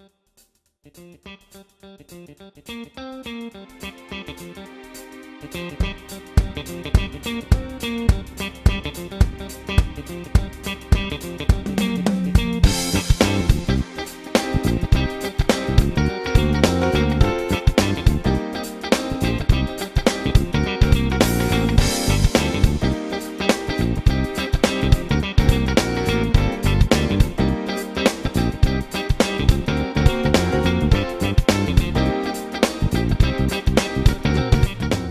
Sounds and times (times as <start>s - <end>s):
Strum: 3.5s - 35.1s.